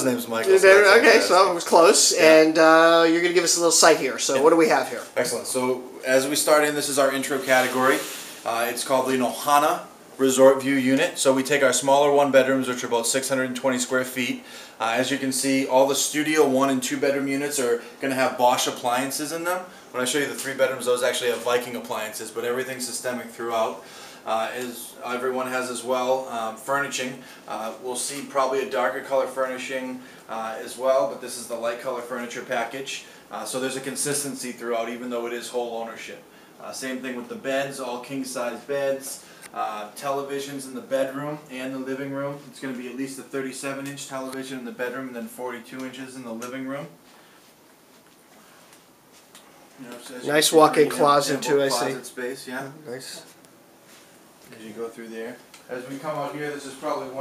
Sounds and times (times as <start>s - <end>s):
Speech: 0.0s - 47.0s, 49.8s - 53.4s, 54.5s - 57.2s.